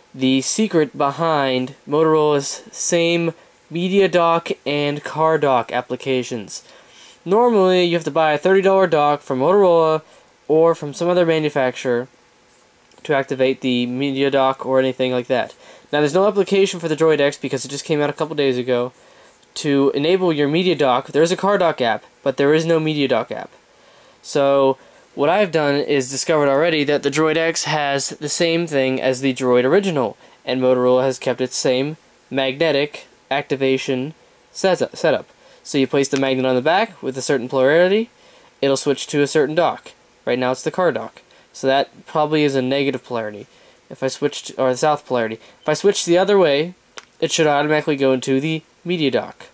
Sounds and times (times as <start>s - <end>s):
Speech: 0.2s - 12.1s, 13.0s - 23.6s, 24.2s - 49.5s.